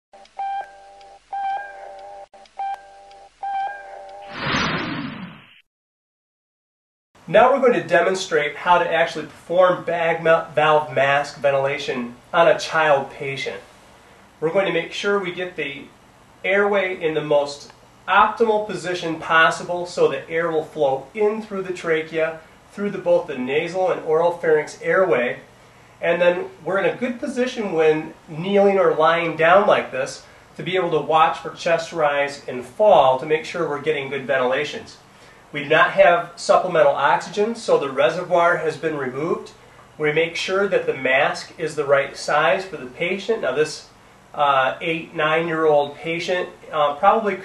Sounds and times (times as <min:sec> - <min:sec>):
Speech: 0:07.3 - 0:13.7, 0:14.4 - 0:47.4.